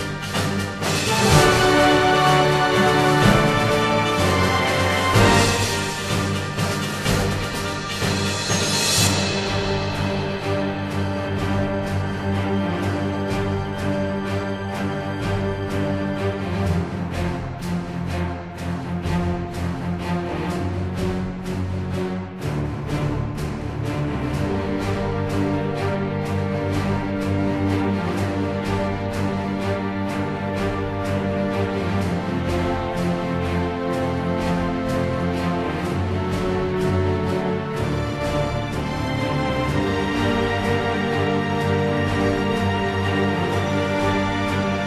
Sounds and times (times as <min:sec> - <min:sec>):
Theme music: 0:00.0 - 0:44.8.